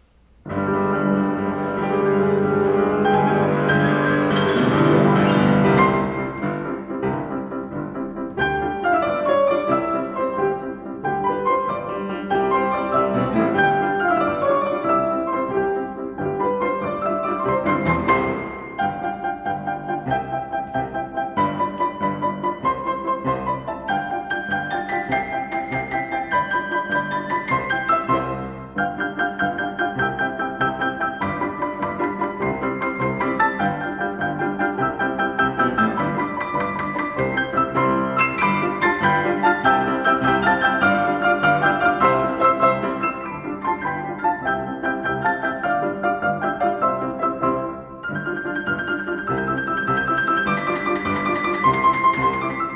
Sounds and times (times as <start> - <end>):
Music: 0.0 - 52.7.